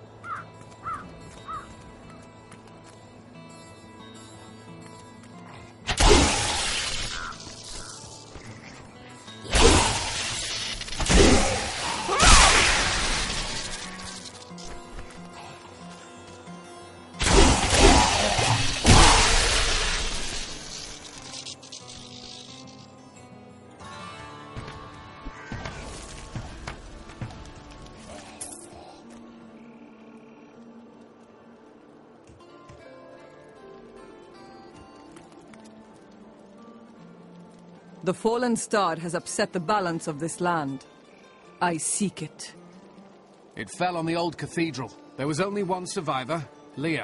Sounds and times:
Music: 0.0 - 47.0.

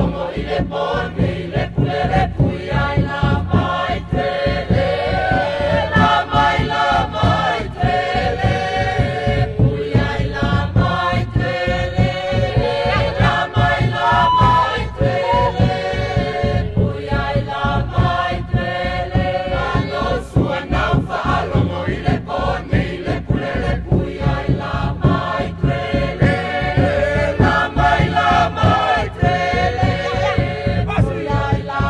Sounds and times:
Music: 0.0 - 31.8.

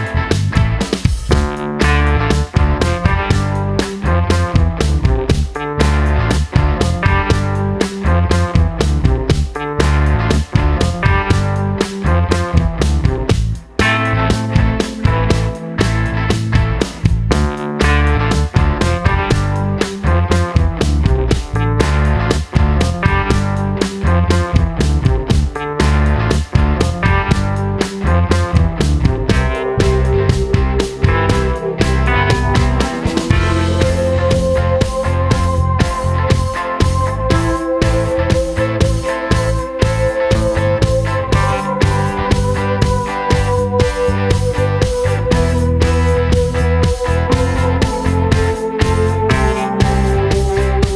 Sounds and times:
Music: 0.0 - 50.9.

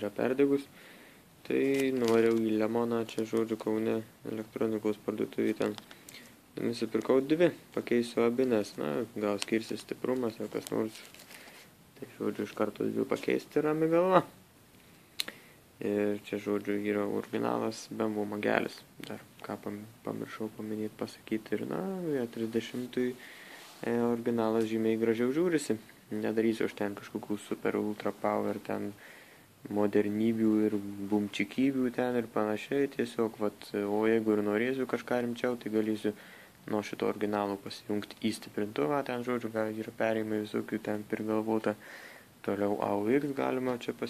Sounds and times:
Speech: 0.0 - 0.7, 1.4 - 5.8, 6.6 - 11.1, 12.0 - 14.4, 15.8 - 23.2, 23.8 - 29.0, 29.6 - 41.8, 42.4 - 44.0.

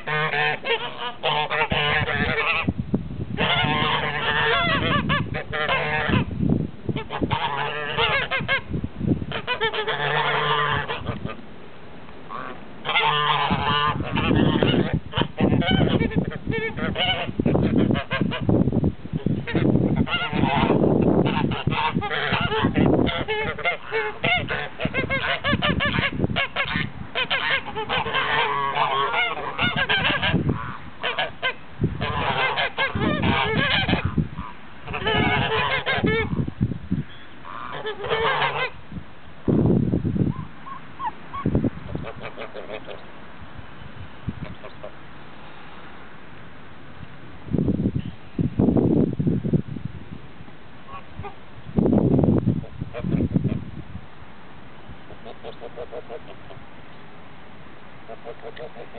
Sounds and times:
Goose: 0.0 - 2.7, 3.4 - 6.3, 7.0 - 8.7, 9.3 - 11.4, 12.3 - 18.6, 19.2 - 36.5, 37.1 - 38.8, 40.3 - 43.1, 44.4 - 45.0, 50.9 - 51.4, 52.6 - 53.6, 55.1 - 56.7, 58.0 - 58.9.

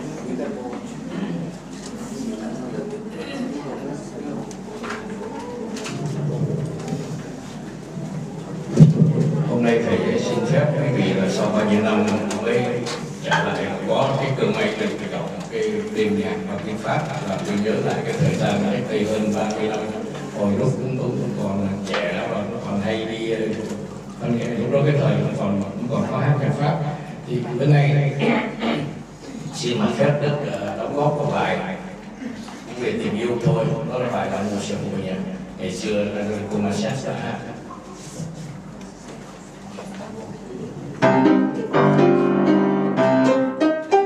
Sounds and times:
Speech: 0.0 - 6.5, 9.1 - 37.7.

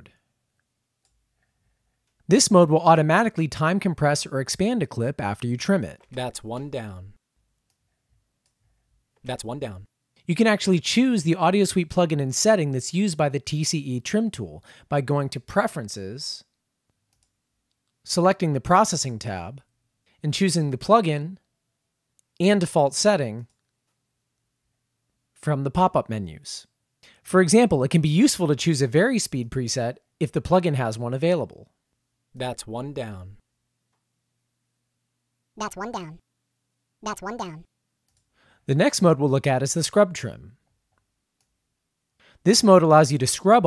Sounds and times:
Speech: 2.3 - 7.2, 9.2 - 16.5, 18.1 - 21.4, 22.4 - 23.5, 25.4 - 31.7, 32.4 - 33.4, 35.6 - 36.2, 37.0 - 37.7, 38.7 - 40.6, 42.4 - 43.6.

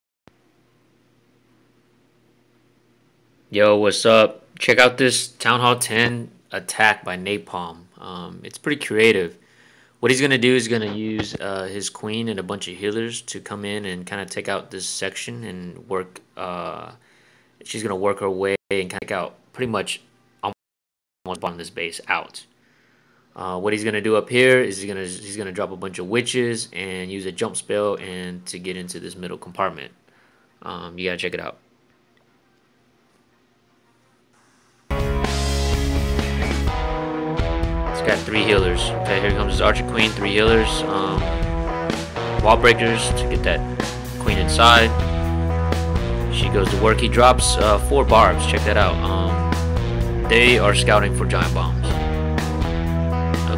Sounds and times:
Speech: 3.5 - 9.4, 10.0 - 17.0, 17.6 - 20.6, 21.3 - 22.5, 23.4 - 30.0, 30.6 - 31.6, 38.0 - 41.3, 42.4 - 43.6, 44.2 - 45.0, 46.3 - 49.4, 50.3 - 52.0
Music: 32.0 - 53.5.

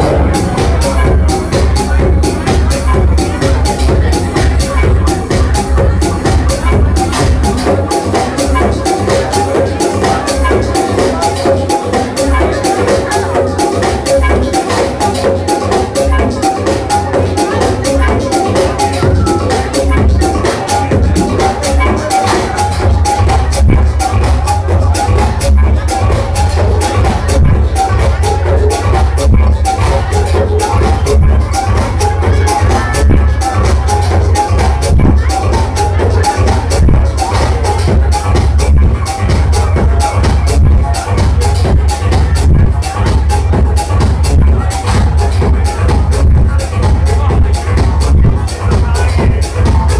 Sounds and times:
Music: 0.0 - 49.9.

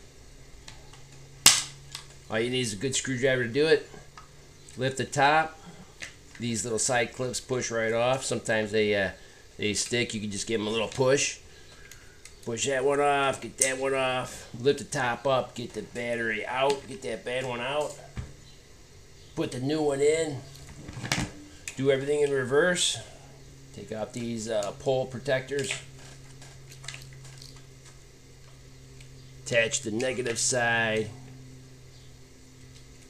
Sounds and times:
Speech: 2.3 - 4.0, 4.8 - 5.6, 6.4 - 11.4, 12.5 - 18.1, 19.4 - 20.5, 21.8 - 23.2, 23.8 - 25.8, 29.5 - 31.2.

